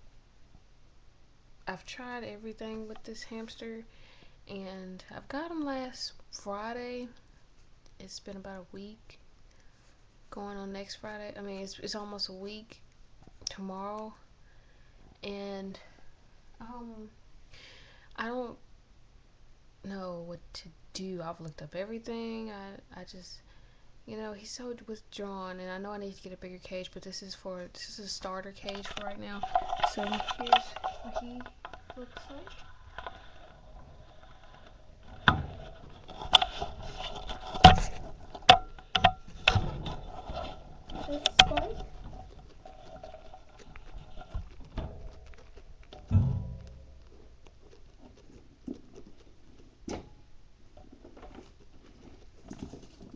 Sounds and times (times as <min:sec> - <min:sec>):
Speech: 0:01.7 - 0:03.9, 0:04.5 - 0:07.2, 0:08.0 - 0:09.2, 0:10.3 - 0:12.8, 0:13.5 - 0:14.2, 0:15.2 - 0:15.9, 0:16.6 - 0:17.2, 0:18.2 - 0:18.6, 0:19.8 - 0:23.4, 0:24.1 - 0:32.5, 0:41.0 - 0:41.9.